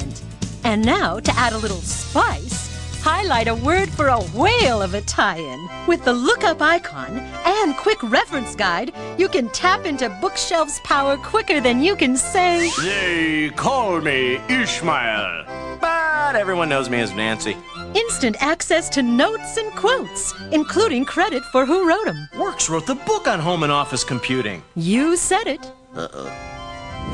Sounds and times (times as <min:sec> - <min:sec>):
Speech: 0:00.0 - 0:26.2
Music: 0:00.0 - 0:27.1.